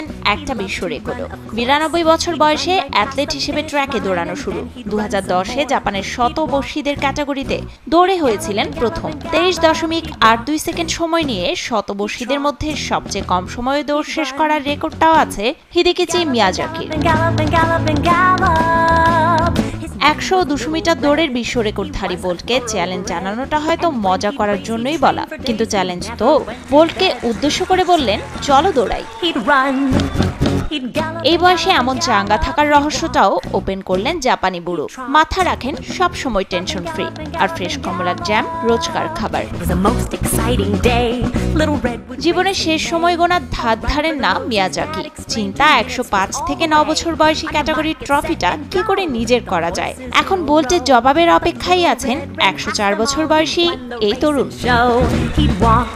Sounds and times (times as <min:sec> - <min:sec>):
Speech: 0:00.0 - 0:18.2, 0:19.8 - 0:30.0, 0:30.7 - 0:55.9
Music: 0:00.0 - 0:55.9.